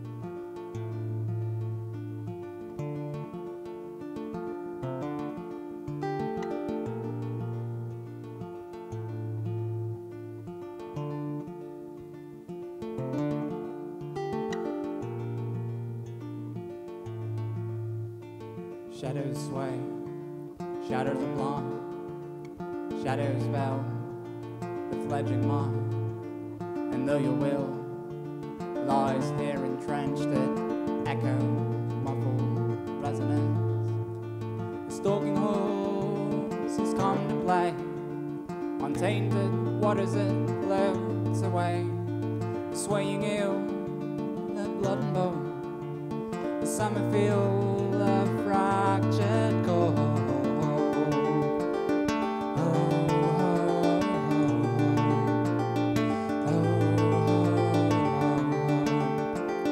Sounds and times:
Music: 0.0s - 59.7s.

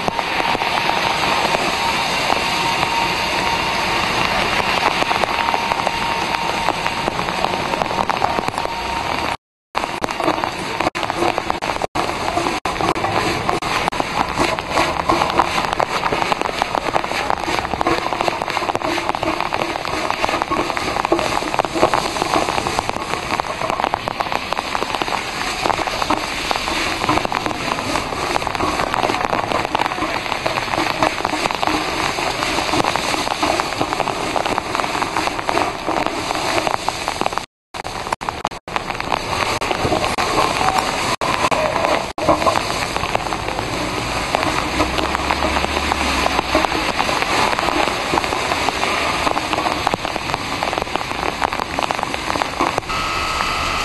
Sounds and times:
Rain: 0.0s - 53.8s.

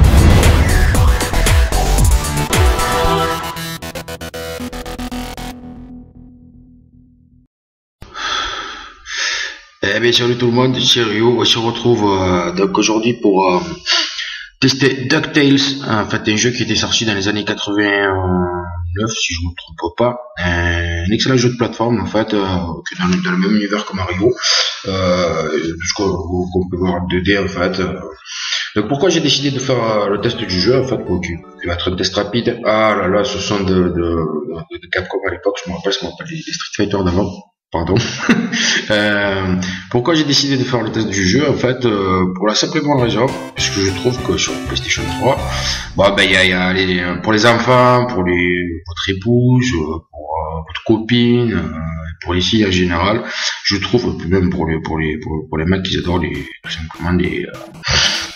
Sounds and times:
Speech: 9.2s - 58.3s.

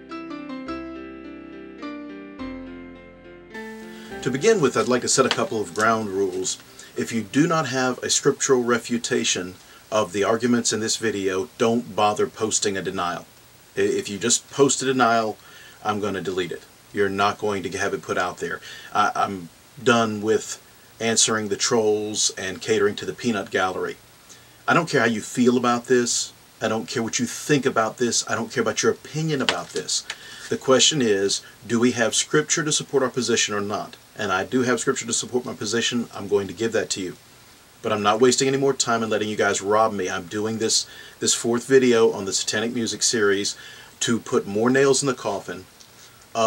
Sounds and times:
Speech: 4.2s - 24.0s, 24.7s - 37.2s, 37.8s - 45.7s.

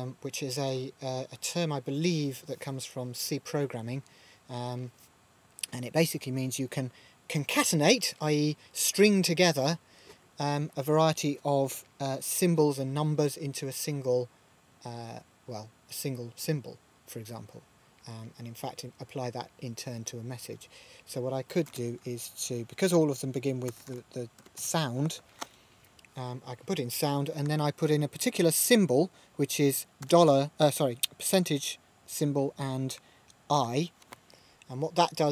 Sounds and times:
Speech: 0.0s - 5.0s, 5.6s - 9.8s, 10.4s - 25.2s, 26.2s - 33.9s, 34.7s - 35.3s.

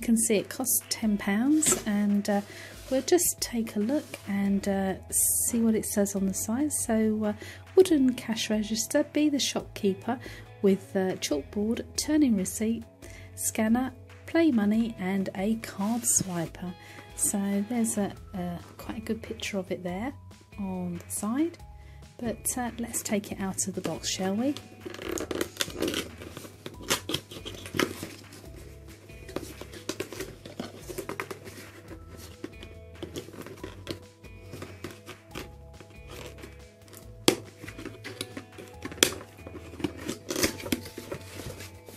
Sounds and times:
Speech: 0.0s - 12.8s, 13.4s - 21.6s, 22.2s - 24.6s
Music: 0.0s - 41.9s.

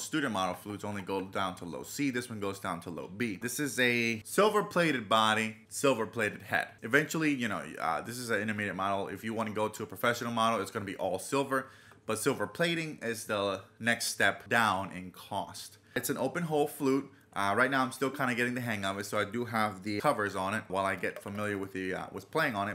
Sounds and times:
Speech: 0.0s - 22.7s.

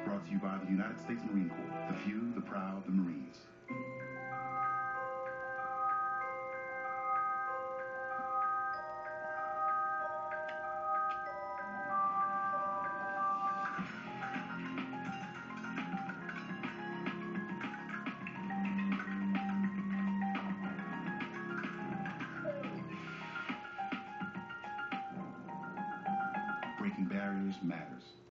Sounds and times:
Speech: 0.0s - 3.5s, 26.8s - 28.3s
Music: 0.0s - 28.3s.

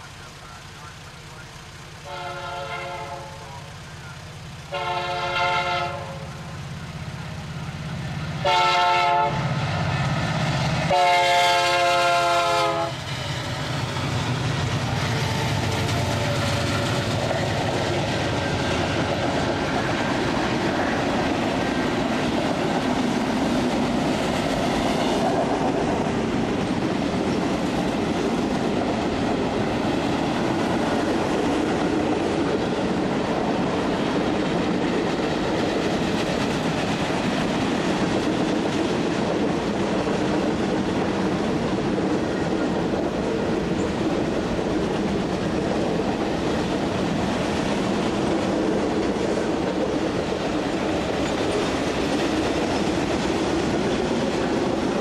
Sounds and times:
Railroad car, train wagon: 0.0s - 55.0s
Train: 0.0s - 55.0s
Clickety-clack: 13.0s - 55.0s.

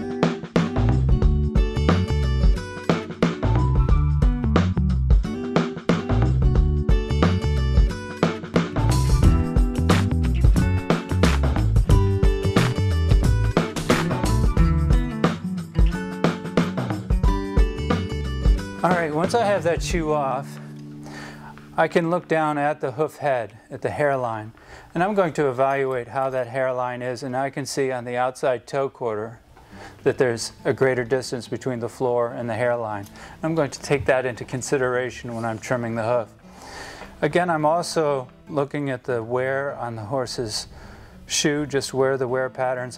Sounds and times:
Music: 0.0s - 28.8s, 29.5s - 42.9s
Speech: 18.8s - 20.6s, 21.8s - 29.4s, 30.0s - 36.3s, 37.2s - 40.7s, 41.3s - 42.9s.

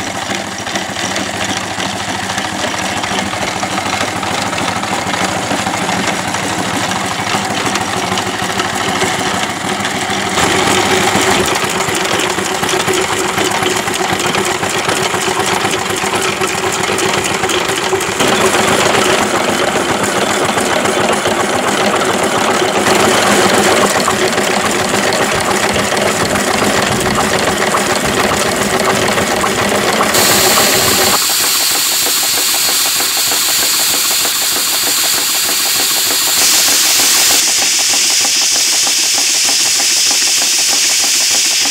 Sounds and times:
Idling: 0.0s - 41.7s
Medium engine (mid frequency): 0.0s - 41.7s
Vehicle: 0.0s - 41.7s.

